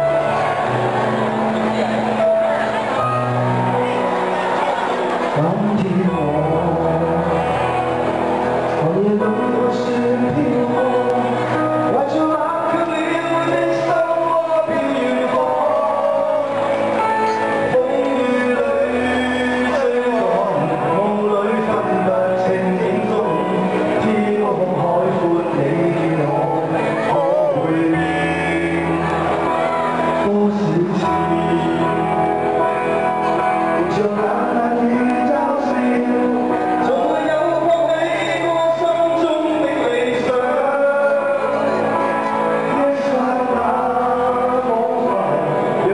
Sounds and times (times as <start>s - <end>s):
Music: 0.0s - 45.9s.